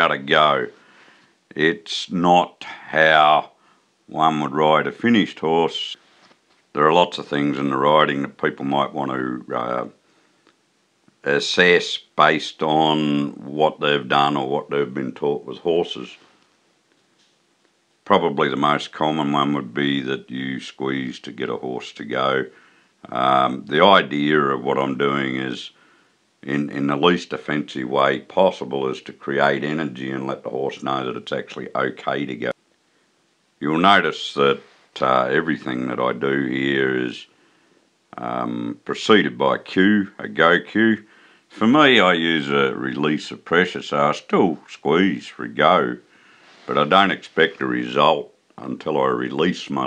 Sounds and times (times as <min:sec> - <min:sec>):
Speech: 0:00.0 - 0:00.8, 0:01.5 - 0:06.0, 0:06.7 - 0:10.0, 0:11.2 - 0:16.3, 0:18.1 - 0:25.8, 0:26.4 - 0:32.6, 0:33.6 - 0:37.3, 0:38.1 - 0:49.8.